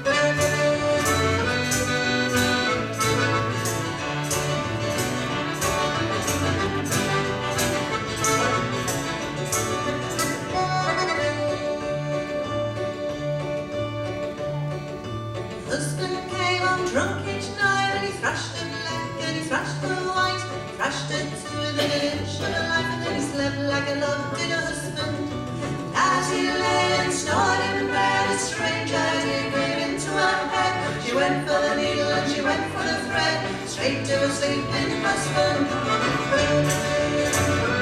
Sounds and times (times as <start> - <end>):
Music: 0.0 - 37.8.